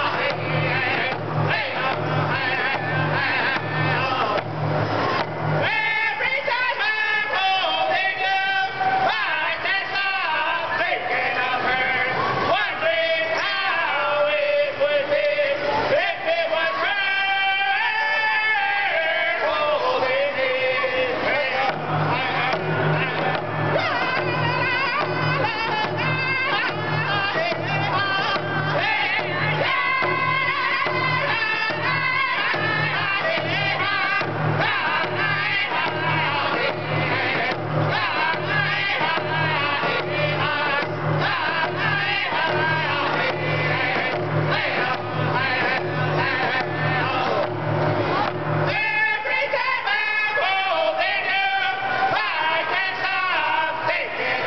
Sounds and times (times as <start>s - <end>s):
Male singing: 0.0s - 4.5s, 5.6s - 54.4s
Music: 0.0s - 54.4s.